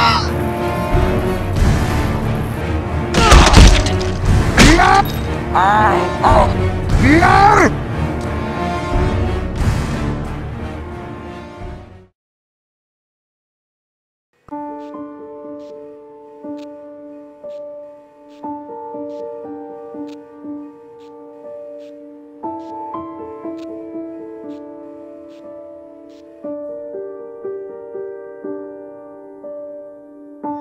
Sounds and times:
Tender music: 0.0 - 12.2, 14.5 - 30.6.

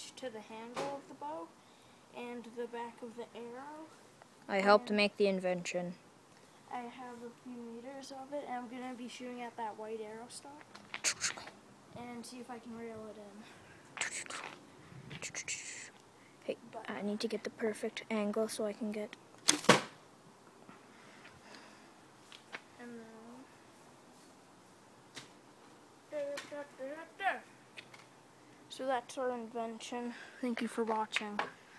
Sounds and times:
Speech: 0.0 - 1.5, 2.2 - 6.0, 6.7 - 10.7, 12.0 - 13.5, 28.7 - 31.5
Thump, thud: 19.6 - 20.0.

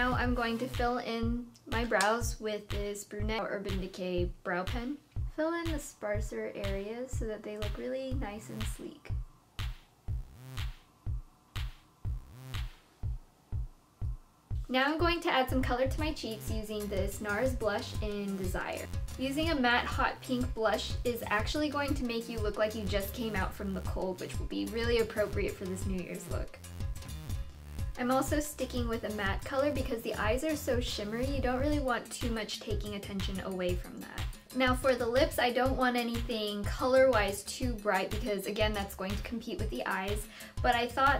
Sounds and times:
Speech: 0.0 - 9.2, 14.7 - 26.6, 28.0 - 41.1
Music: 0.0 - 41.1.

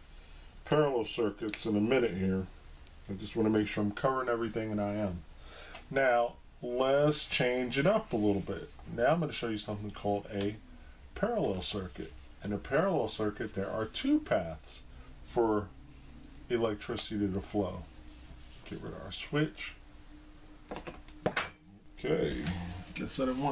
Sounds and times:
Inside, small room: 0.0 - 23.5
Speech: 0.6 - 5.3, 5.9 - 10.6, 11.2 - 15.7, 16.5 - 17.9, 18.6 - 19.8, 22.0 - 23.5.

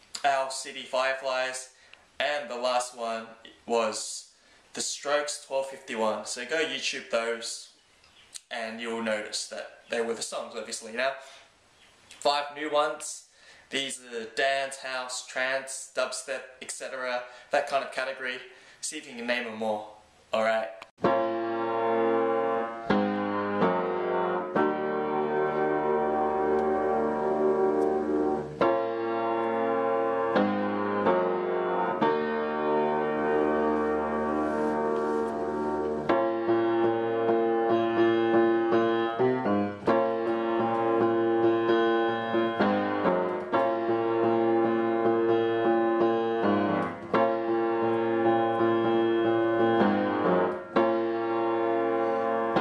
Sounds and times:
Speech: 0.2 - 7.8, 8.4 - 11.3, 12.2 - 20.8
Music: 21.0 - 52.6.

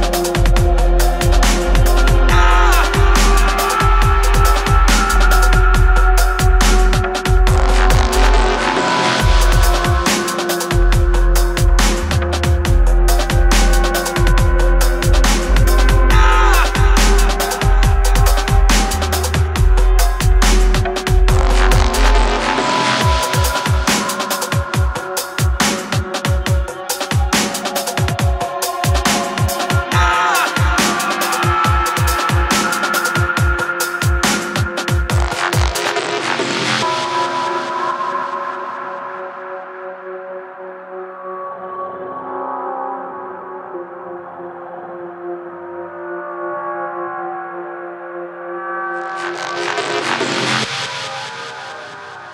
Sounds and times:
Dubstep: 0.0 - 39.5, 49.0 - 52.3.

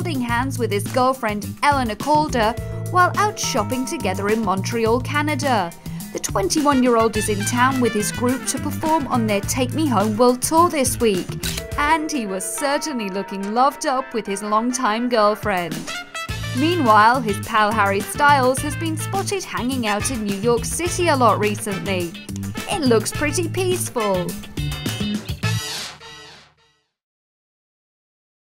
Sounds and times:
Speech: 0.0 - 15.9, 16.6 - 24.4
Music: 0.0 - 27.0.

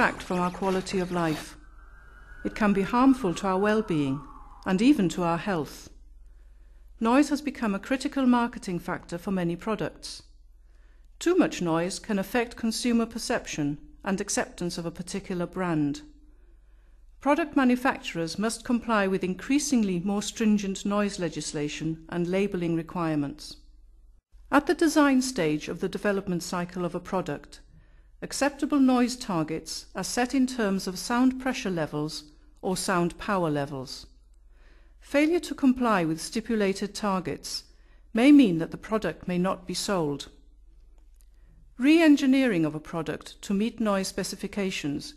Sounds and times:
Speech: 0.0 - 1.6, 2.4 - 6.0, 7.0 - 10.3, 11.2 - 16.1, 17.2 - 23.6, 24.5 - 27.6, 28.2 - 34.1, 35.0 - 40.4, 41.8 - 45.1.

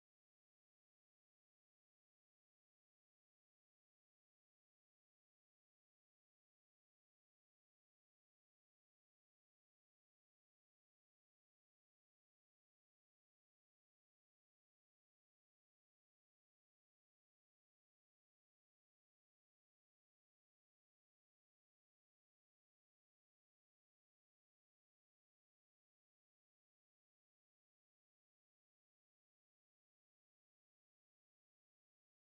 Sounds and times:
Silence: 0.0 - 32.2.

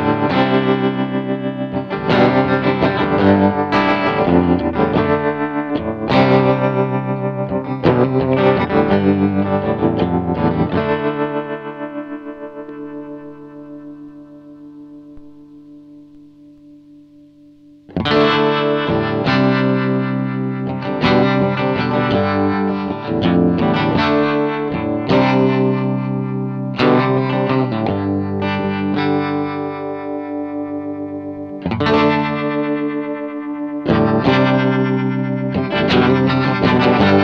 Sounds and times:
Effects unit: 0.0 - 37.2
Guitar: 0.0 - 37.2.

